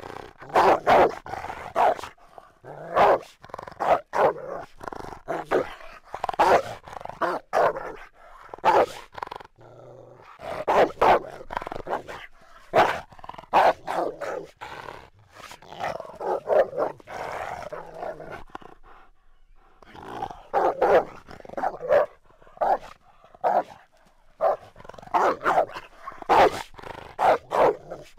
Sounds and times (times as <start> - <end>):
Growling: 0.0 - 28.1.